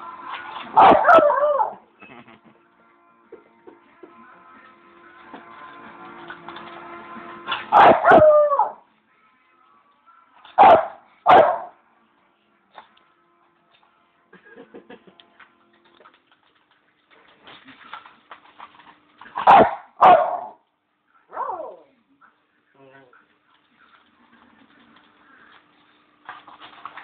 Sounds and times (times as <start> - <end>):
Music: 0.0 - 16.7
Bark: 0.8 - 1.8, 7.7 - 8.8, 10.6 - 11.8, 19.4 - 20.6, 21.3 - 21.9
Yip: 0.8 - 1.8, 7.8 - 8.8, 10.6 - 11.7, 19.4 - 20.6, 21.3 - 21.9
Speech: 21.8 - 23.2.